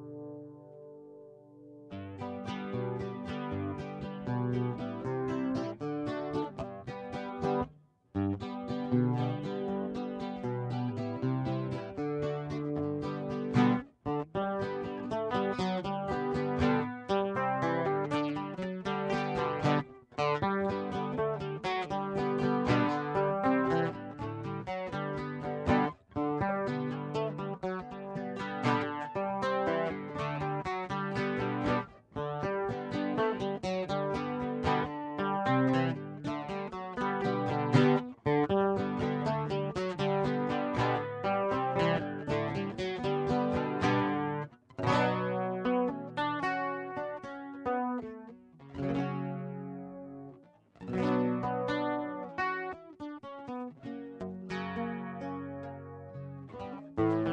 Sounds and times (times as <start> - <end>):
Acoustic guitar: 0.0 - 57.3
Strum: 0.0 - 57.3.